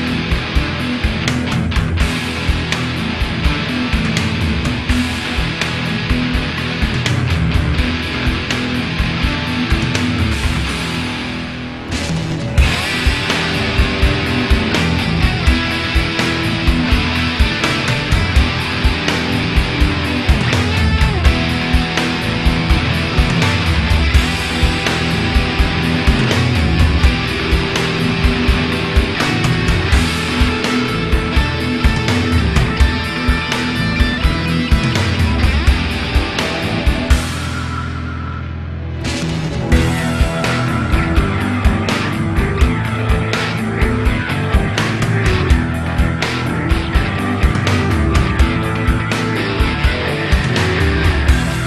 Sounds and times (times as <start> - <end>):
Music: 0.0 - 51.6.